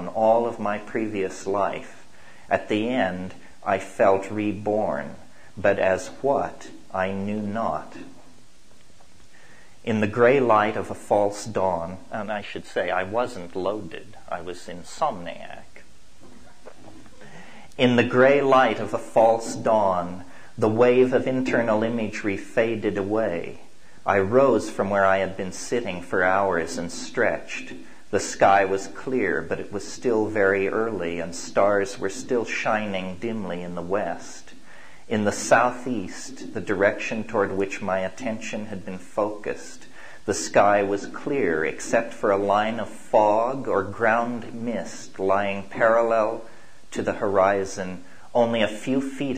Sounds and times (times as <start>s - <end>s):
Speech: 0.0s - 8.2s, 9.8s - 15.9s, 17.4s - 49.3s.